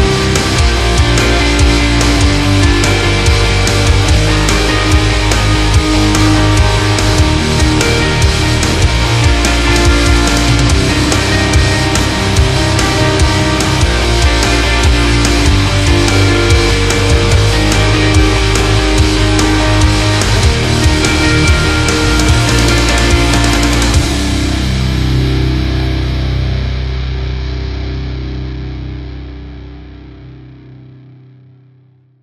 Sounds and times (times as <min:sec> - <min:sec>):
Angry music: 0:00.0 - 0:30.2.